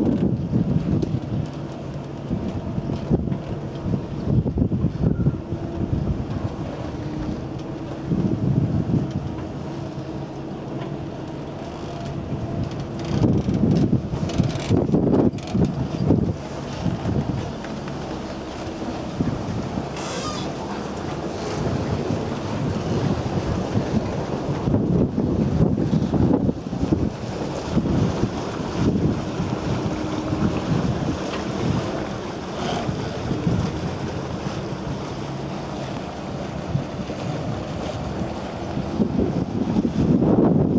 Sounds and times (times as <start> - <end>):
Sailboat, sailing ship: 0.0 - 40.7.